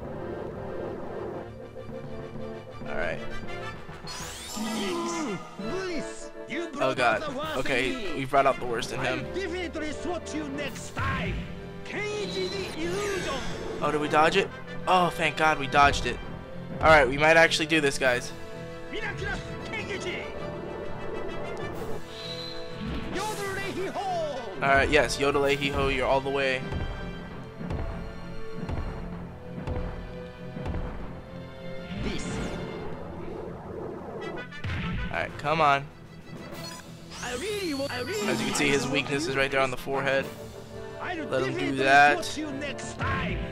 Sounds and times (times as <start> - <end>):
Music: 0.0 - 43.5.